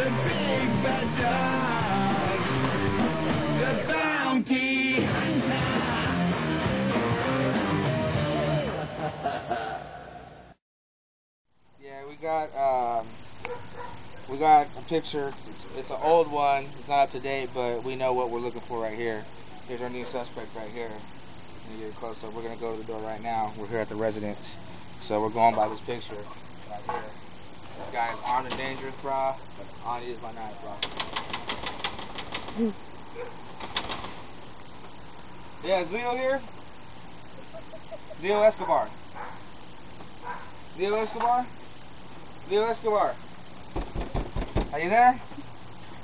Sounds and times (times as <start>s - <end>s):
Music: 0.0s - 9.8s
Bow-wow: 13.4s - 14.3s, 33.2s - 33.4s, 38.6s - 39.5s, 40.2s - 40.6s.